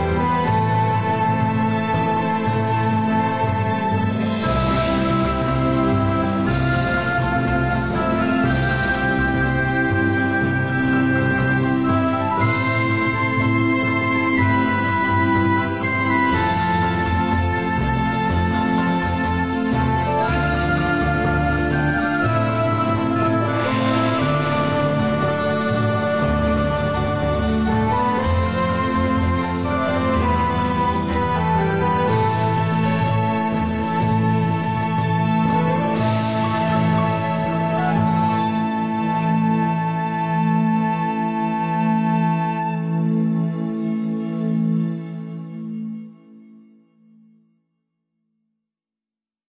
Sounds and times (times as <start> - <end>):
Music: 0.0 - 48.7.